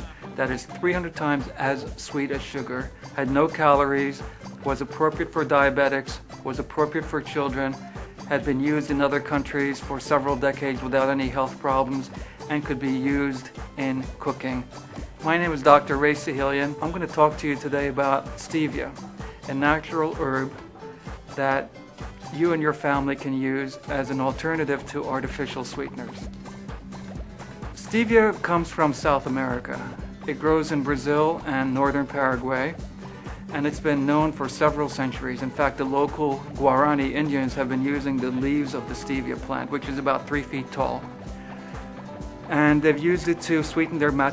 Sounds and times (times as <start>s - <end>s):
Speech: 0.0s - 20.6s, 21.3s - 21.7s, 22.3s - 26.3s, 27.8s - 32.8s, 33.5s - 41.1s, 42.5s - 44.3s
Music: 0.0s - 44.3s.